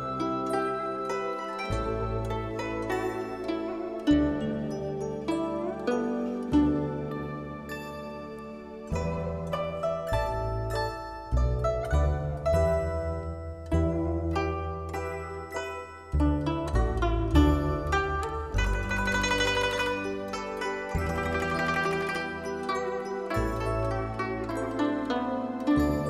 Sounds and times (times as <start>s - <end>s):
Harp: 0.0s - 26.1s.